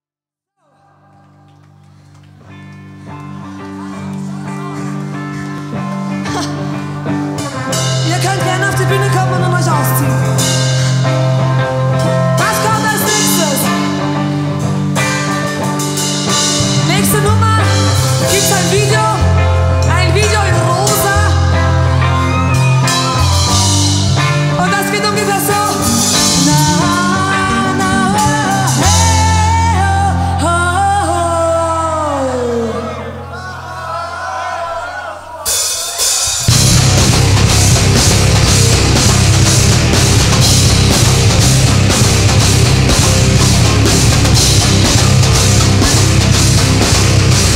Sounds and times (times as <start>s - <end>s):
Music: 0.6s - 47.5s.